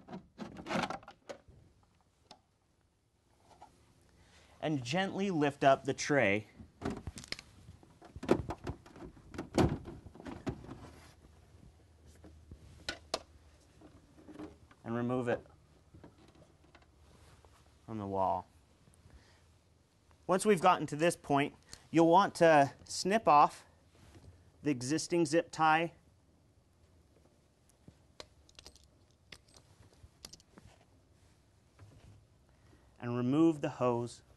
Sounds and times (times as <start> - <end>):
Speech: 4.6 - 6.5, 14.8 - 15.5, 17.9 - 18.5, 20.3 - 23.7, 24.6 - 26.0, 33.0 - 34.2.